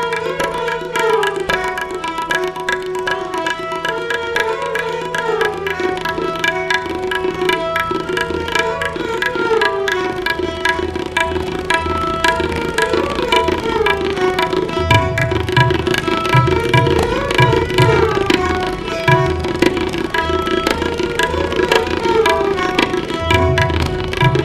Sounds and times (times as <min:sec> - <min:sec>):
Carnatic music: 0:00.0 - 0:24.4
Classical music: 0:00.0 - 0:24.4
Tabla: 0:00.0 - 0:24.4
Violin, fiddle: 0:00.0 - 0:24.4.